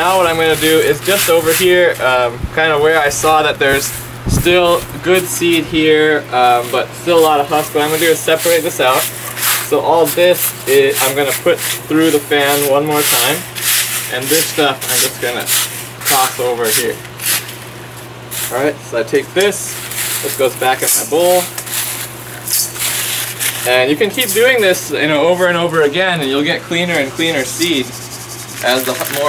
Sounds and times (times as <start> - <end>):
Speech: 0.0 - 9.1, 9.7 - 13.4, 14.1 - 15.5, 16.1 - 17.0, 18.5 - 21.6, 23.6 - 28.0, 28.6 - 29.2.